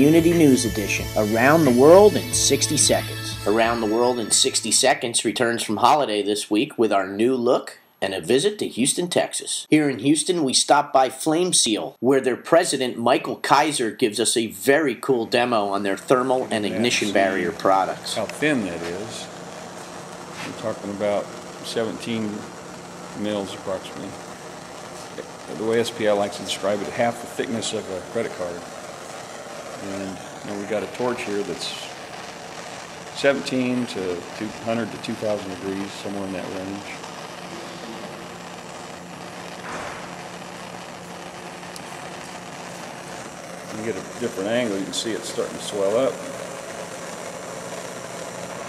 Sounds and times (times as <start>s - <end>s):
Speech: 0.0s - 19.3s, 20.5s - 22.5s, 23.2s - 24.2s, 25.2s - 28.6s, 29.8s - 32.0s, 33.2s - 37.0s, 43.7s - 46.3s
Spray: 16.2s - 48.6s.